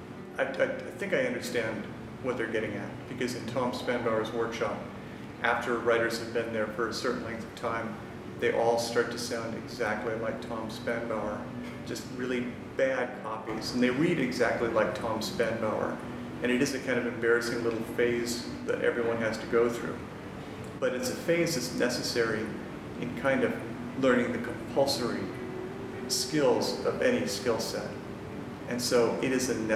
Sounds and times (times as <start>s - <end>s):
Music: 0.0s - 29.7s
Speech: 0.4s - 20.0s, 20.8s - 25.4s, 26.0s - 28.0s, 28.7s - 29.7s.